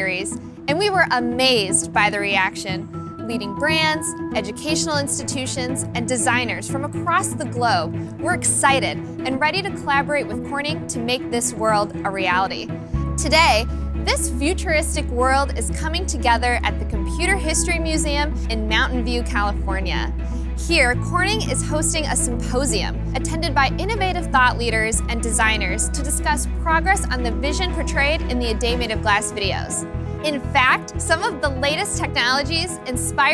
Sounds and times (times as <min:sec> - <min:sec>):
Music: 0:00.0 - 0:33.3
Speech: 0:00.0 - 0:33.3.